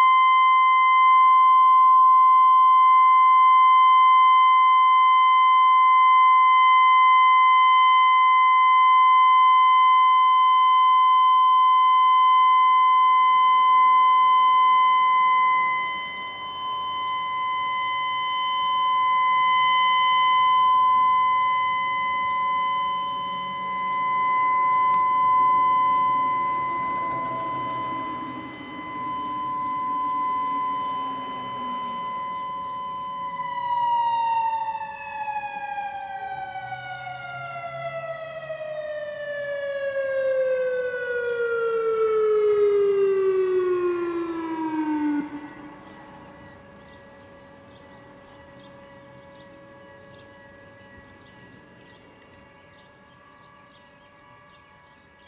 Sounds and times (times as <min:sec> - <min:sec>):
Siren: 0:00.0 - 0:55.2.